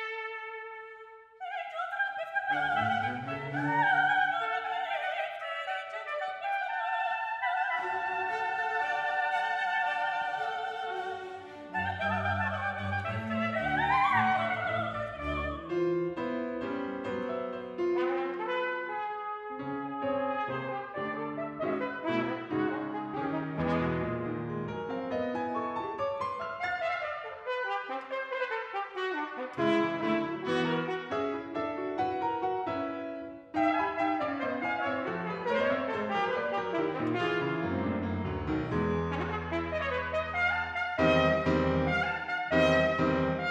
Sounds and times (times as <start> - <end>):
Trumpet: 0.0 - 32.4, 33.2 - 43.5
Classical music: 0.0 - 43.5
Orchestra: 0.0 - 43.5
Piano: 0.0 - 43.5.